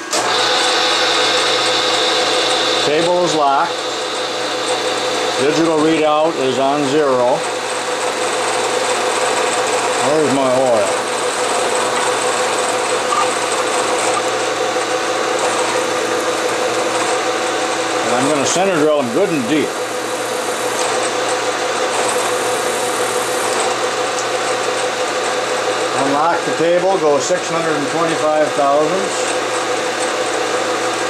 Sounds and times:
Drill: 0.0s - 31.0s
Speech: 2.8s - 3.8s, 5.4s - 7.4s, 10.0s - 11.0s, 18.0s - 19.7s, 26.0s - 29.3s.

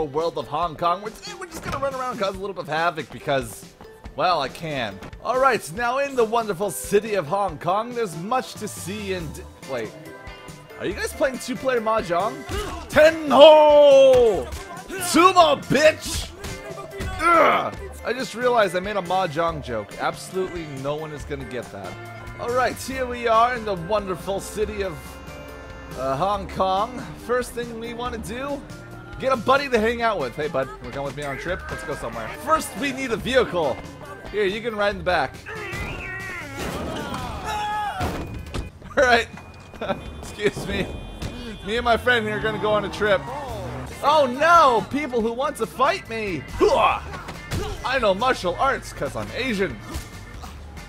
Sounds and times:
Speech: 0.0s - 3.6s, 4.2s - 9.9s, 10.8s - 25.0s, 26.0s - 28.6s, 29.2s - 37.5s, 40.3s - 40.9s, 41.6s - 49.8s
Music: 0.0s - 50.8s.

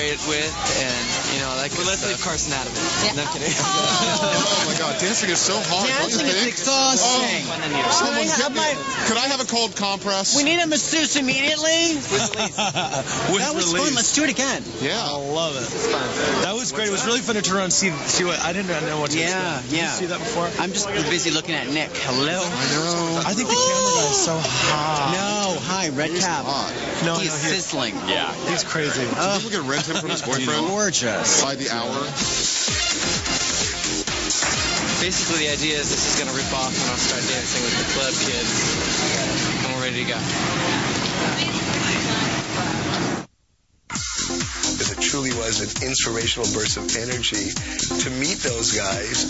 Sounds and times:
Speech: 13.2s - 32.2s, 35.0s - 38.6s, 44.8s - 49.3s.

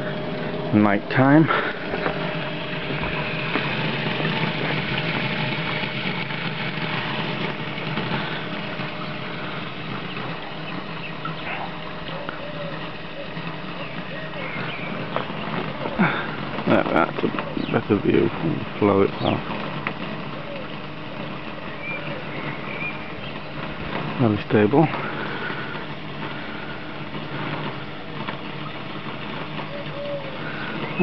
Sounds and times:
Speech: 0.7s - 1.5s, 16.7s - 19.4s, 24.2s - 25.0s.

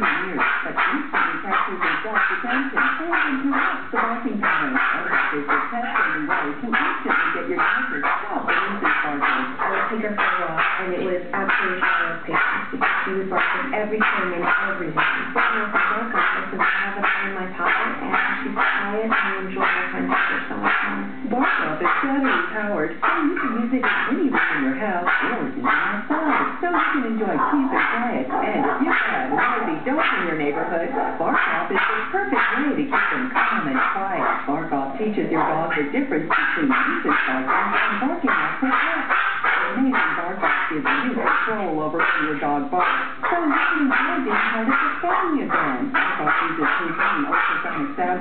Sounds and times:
Bark: 0.0s - 34.7s, 35.3s - 48.2s
Bow-wow: 0.0s - 48.1s
Canidae, dogs, wolves: 0.0s - 48.2s
Speech: 0.0s - 48.2s.

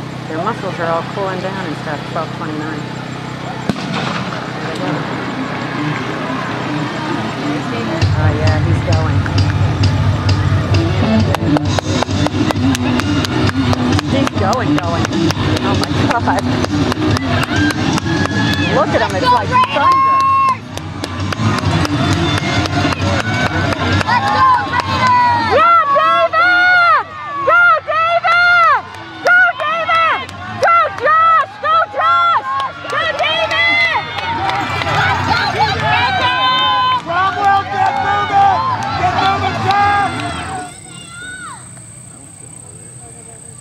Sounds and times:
Outside, urban or manmade: 0.0s - 43.6s
Music: 5.9s - 25.5s.

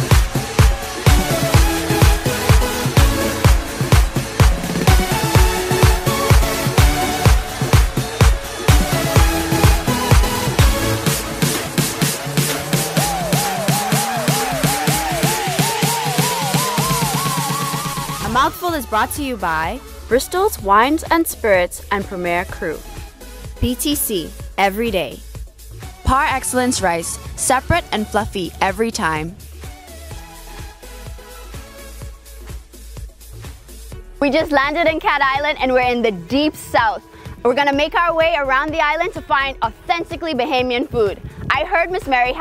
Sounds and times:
Music: 0.0s - 42.4s
Speech: 18.2s - 22.8s, 23.6s - 25.2s, 26.1s - 29.4s, 34.2s - 42.4s.

